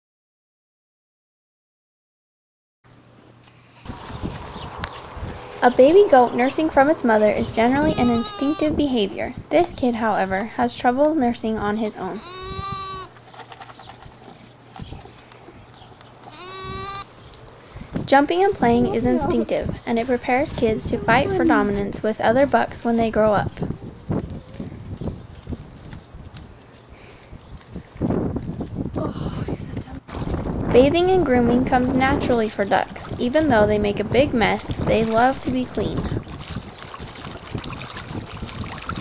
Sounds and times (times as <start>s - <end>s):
Speech: 5.6s - 12.2s, 18.1s - 23.6s, 30.7s - 36.2s
Goat: 7.6s - 8.7s, 12.1s - 17.4s.